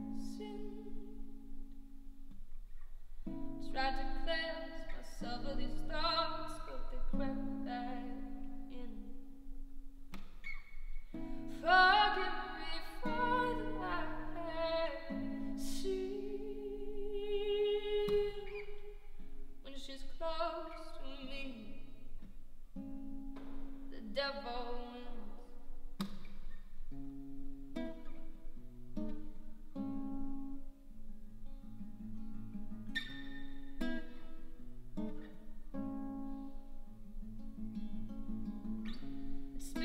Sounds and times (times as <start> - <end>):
Music: 0.0 - 39.8.